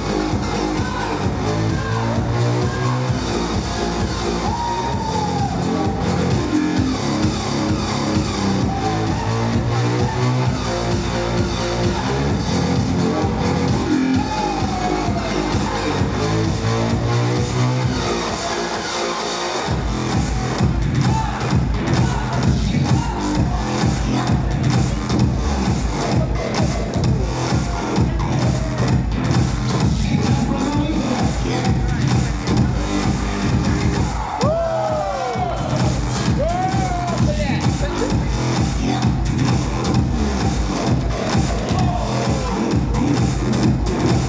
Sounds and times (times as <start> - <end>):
Music: 0.0 - 44.2.